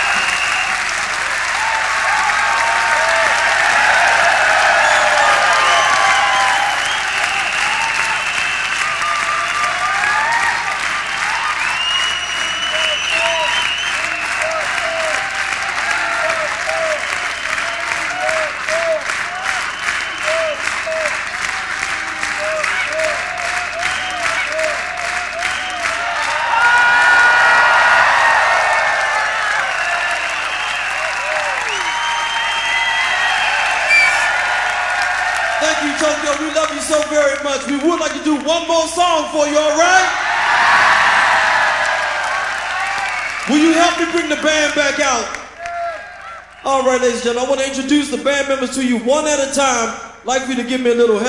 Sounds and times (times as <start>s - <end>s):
Applause: 0.0s - 48.0s.